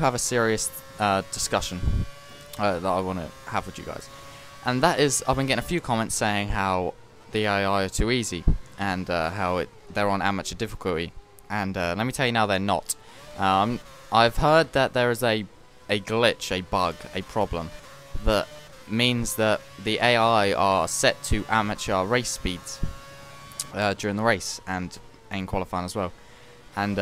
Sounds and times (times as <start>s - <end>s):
Speech: 0.0s - 2.0s, 2.6s - 23.0s, 23.6s - 26.2s, 26.8s - 27.0s.